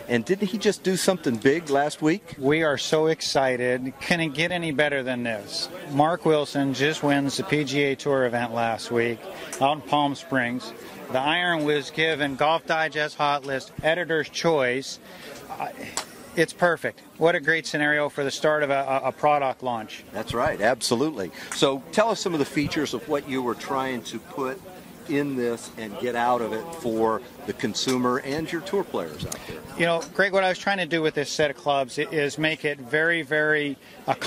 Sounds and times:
Speech: 0.0s - 34.2s.

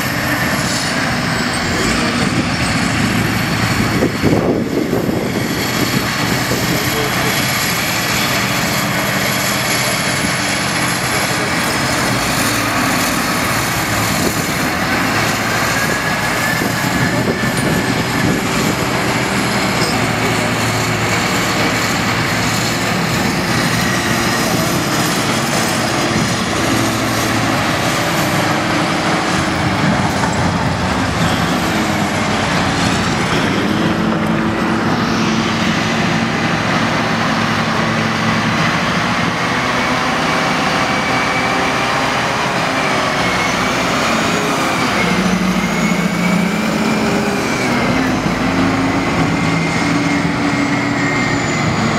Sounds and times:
Vehicle: 0.0s - 51.9s.

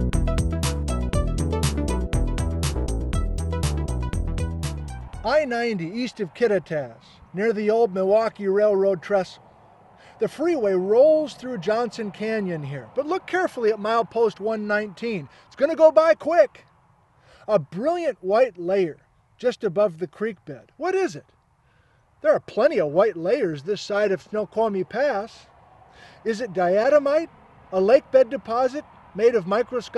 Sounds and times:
Music: 0.0s - 5.3s
Speech: 5.3s - 9.4s, 10.2s - 16.7s, 17.5s - 21.3s, 22.2s - 25.5s, 26.2s - 29.9s.

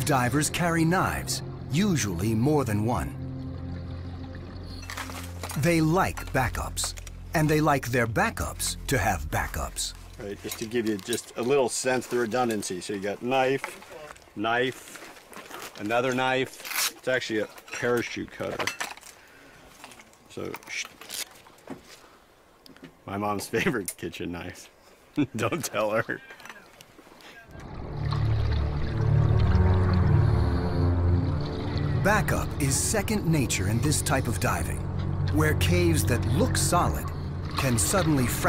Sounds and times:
Music: 0.0s - 10.8s, 27.6s - 38.4s
Speech: 5.6s - 14.8s, 32.0s - 38.4s.

